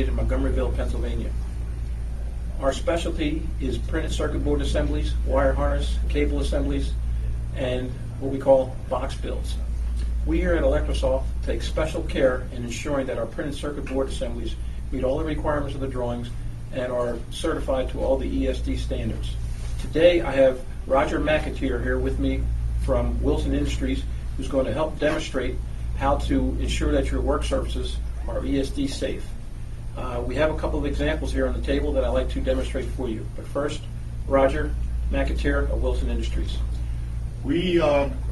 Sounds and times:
Speech: 0.0 - 1.4, 2.2 - 29.4, 30.0 - 36.8, 37.4 - 38.3.

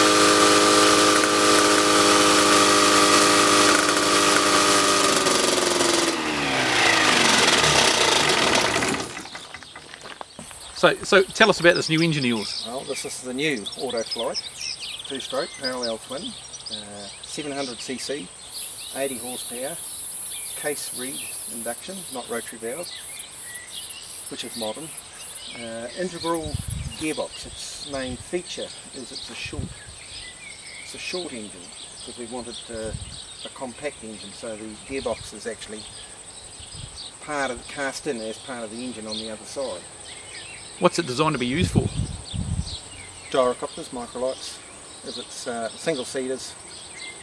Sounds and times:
Engine: 0.0 - 9.8
Speech: 10.8 - 14.4, 15.1 - 18.3, 19.0 - 19.8, 20.6 - 22.9, 24.3 - 24.9, 25.6 - 29.7, 30.9 - 35.9, 37.2 - 39.8, 40.8 - 42.0, 43.3 - 46.6.

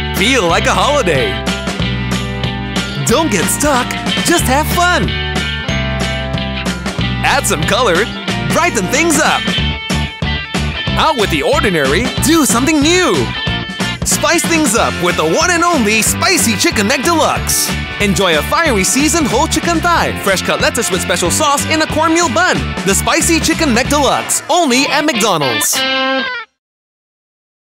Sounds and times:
Music: 0.0 - 26.6
Speech: 0.2 - 1.4, 3.0 - 5.1, 7.3 - 9.4, 11.0 - 13.3, 14.0 - 25.8.

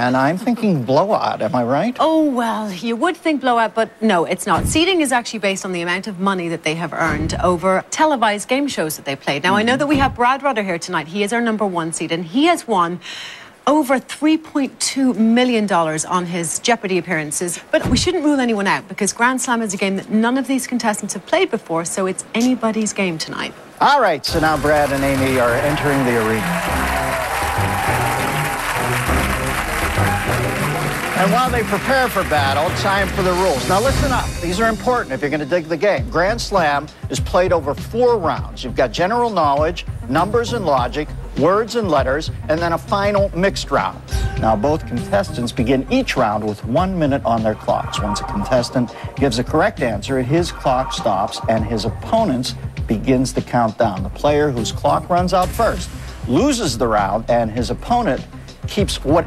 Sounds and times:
Music: 24.3 - 59.2.

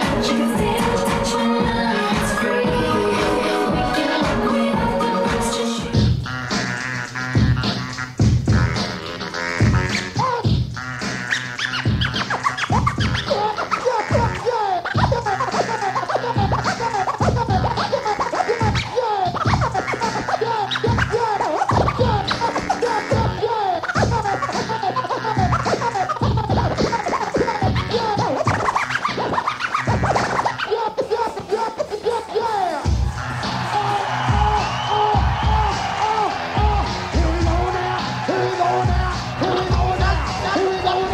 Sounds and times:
Electronic music: 0.0 - 41.1.

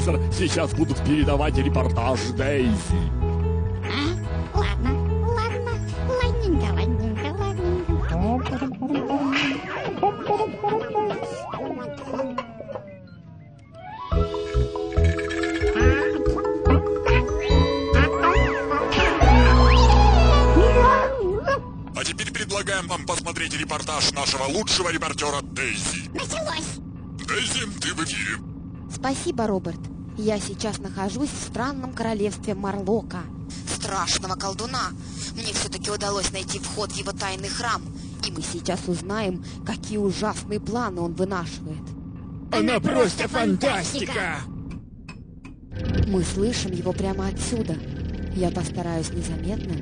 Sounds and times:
Music: 0.0 - 8.3, 13.8 - 21.5.

